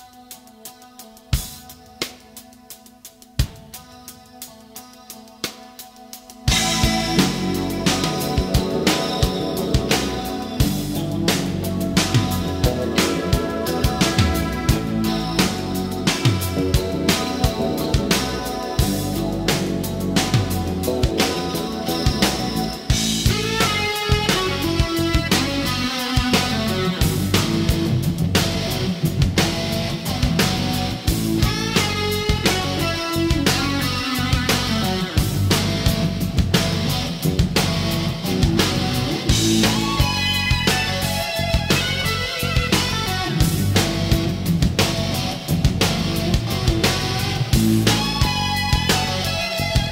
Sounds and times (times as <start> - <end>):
Music: 0.0 - 49.9.